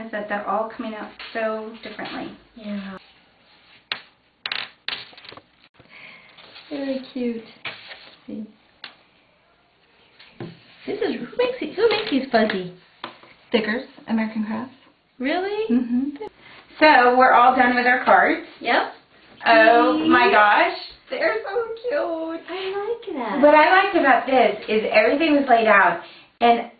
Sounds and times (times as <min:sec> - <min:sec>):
Inside, small room: 0:00.0 - 0:26.7.